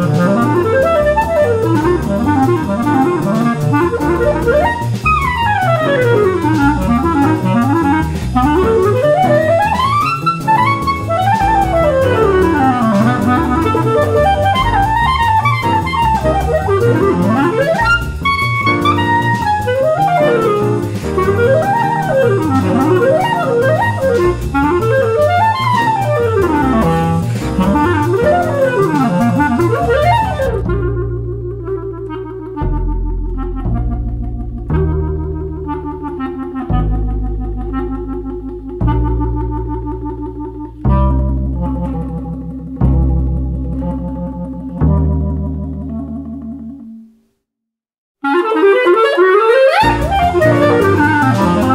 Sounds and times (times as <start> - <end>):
Theremin: 0.0 - 47.1, 48.3 - 51.7
Clarinet: 0.0 - 47.3, 48.2 - 51.7.